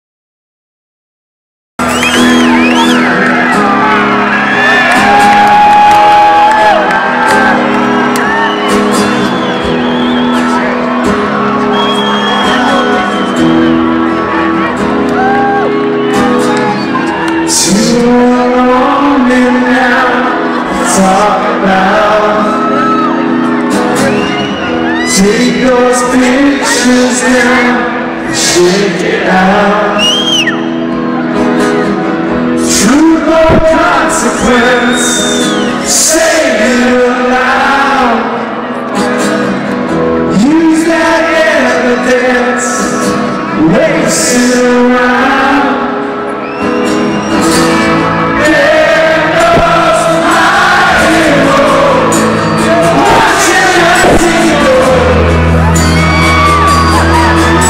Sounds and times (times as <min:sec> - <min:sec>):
Inside, public space: 0:01.8 - 0:57.6
Music: 0:01.8 - 0:57.6.